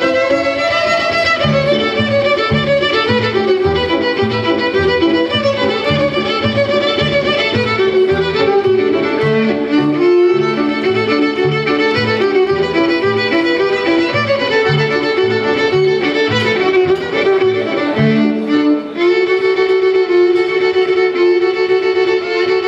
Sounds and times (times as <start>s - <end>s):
Violin, fiddle: 0.0s - 22.6s.